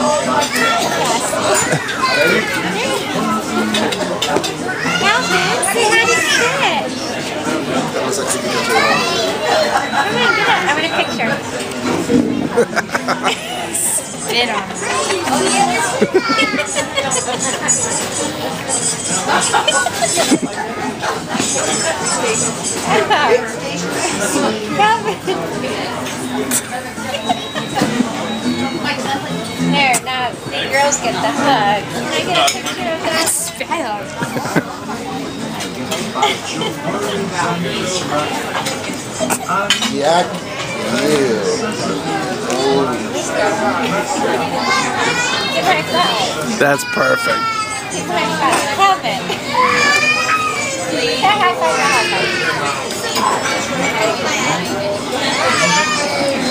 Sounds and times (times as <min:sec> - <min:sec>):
Inside, public space: 0:00.0 - 0:56.5.